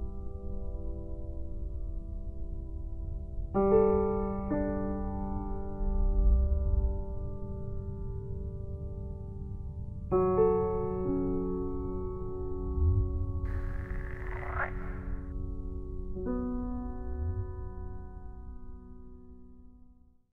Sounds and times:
Croak: 13.5 - 15.3.

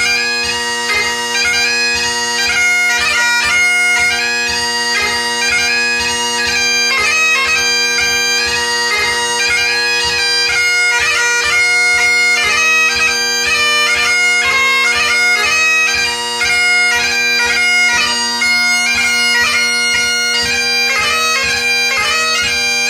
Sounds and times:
Bagpipes: 0.0 - 22.8.

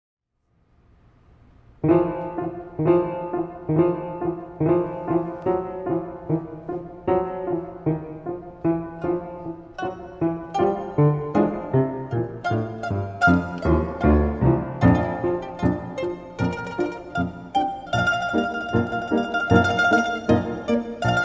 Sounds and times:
Mandolin: 1.8 - 21.2.

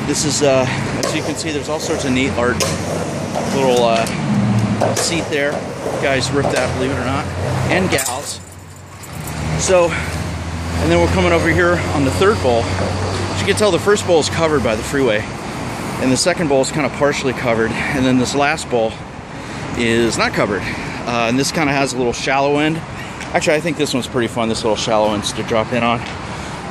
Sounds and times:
Speech: 0.0 - 2.7, 3.5 - 4.2, 5.0 - 8.4, 9.6 - 10.0, 10.8 - 12.8, 13.4 - 15.3, 16.0 - 19.0, 19.8 - 26.1
Vehicle: 0.0 - 26.7.

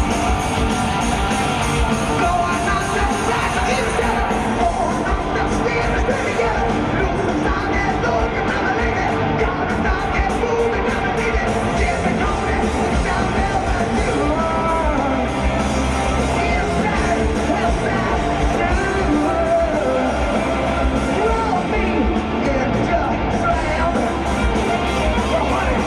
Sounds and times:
Music: 0.0 - 25.8.

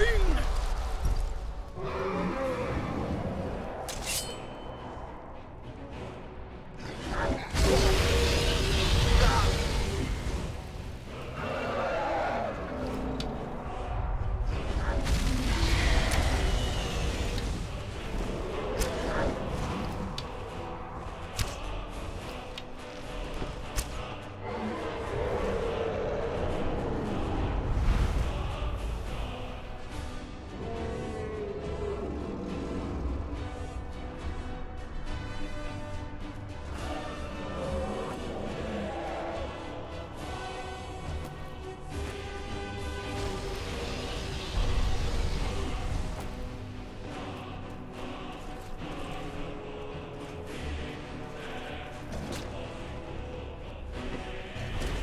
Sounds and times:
Music: 0.0 - 55.0
Bellow: 11.4 - 13.1.

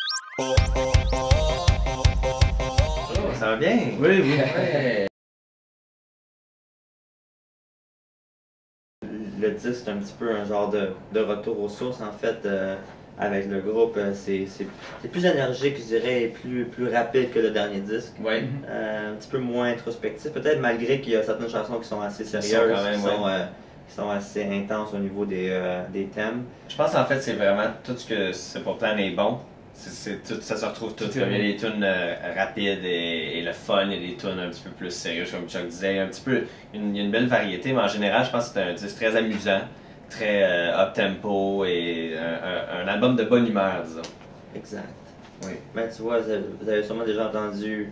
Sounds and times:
Speech: 3.1 - 5.1, 9.0 - 47.9.

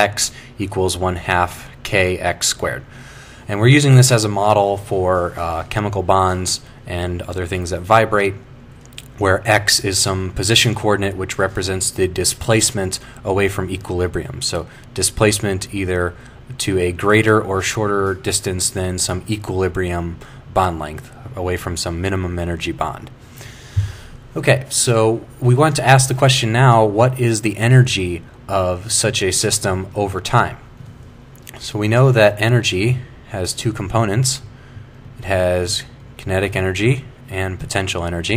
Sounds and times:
Speech: 0.0 - 2.9, 3.5 - 23.2, 24.4 - 30.7, 31.5 - 34.5, 35.2 - 38.3.

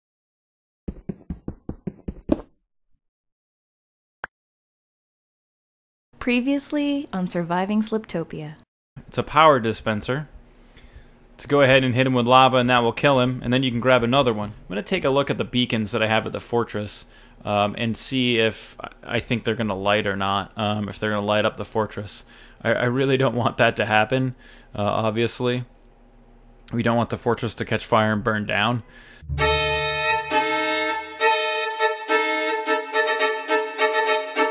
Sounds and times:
Speech: 6.2 - 10.3, 11.4 - 25.7, 26.7 - 28.9.

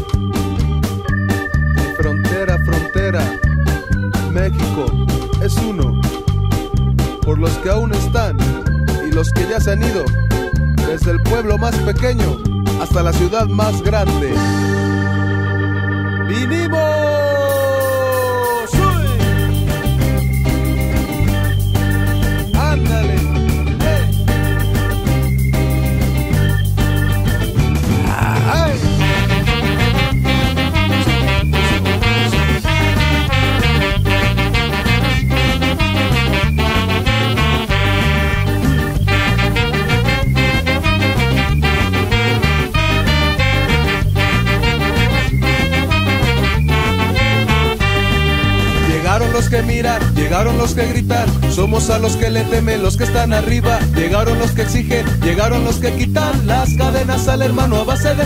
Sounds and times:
Swing music: 0.0 - 58.2.

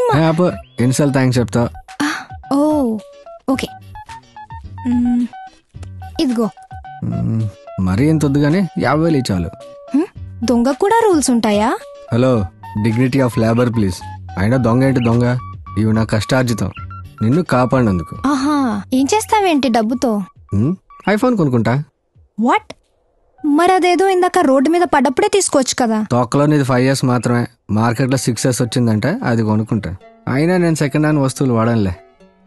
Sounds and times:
Music: 0.0 - 22.6, 23.4 - 26.1, 27.9 - 32.4
Speech: 6.2 - 18.2, 18.8 - 22.7, 23.5 - 32.0.

